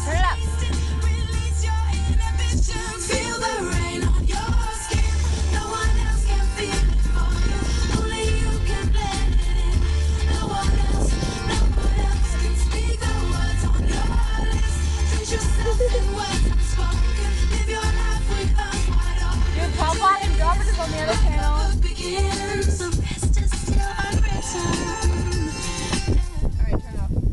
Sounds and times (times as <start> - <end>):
Speech: 0.0 - 0.4, 19.6 - 21.7, 26.6 - 27.2
Female singing: 0.0 - 27.2
Music: 0.0 - 27.3.